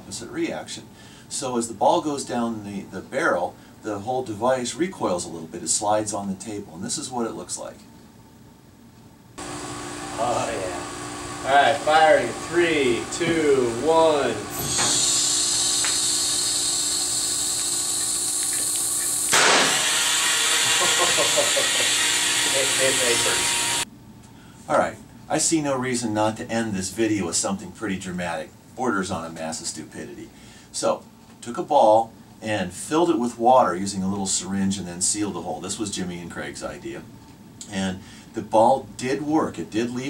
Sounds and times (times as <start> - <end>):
Speech: 0.0 - 7.8, 10.2 - 10.8, 11.4 - 14.5, 22.5 - 23.5, 24.7 - 40.0.